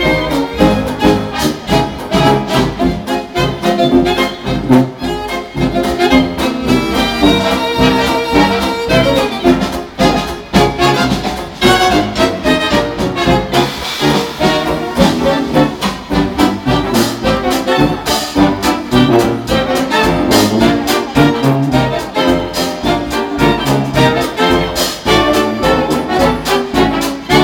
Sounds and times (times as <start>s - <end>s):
Orchestra: 0.0s - 27.4s
Trombone: 0.0s - 27.4s.